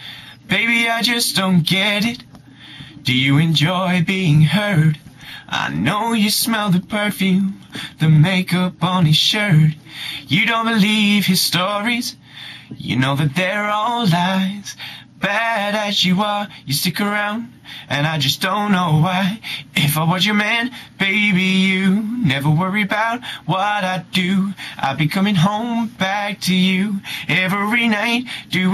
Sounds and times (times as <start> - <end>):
Male singing: 0.5 - 2.3, 3.0 - 28.7.